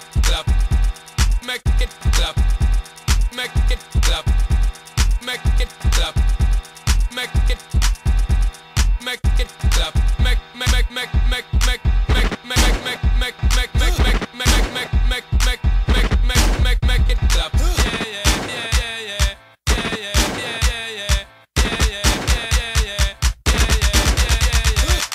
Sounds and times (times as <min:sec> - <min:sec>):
Disco: 0:00.0 - 0:25.1.